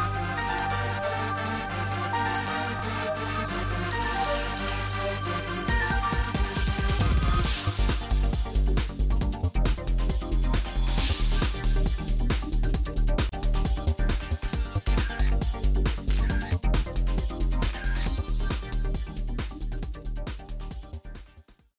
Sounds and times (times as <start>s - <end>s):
Music: 0.0s - 21.7s.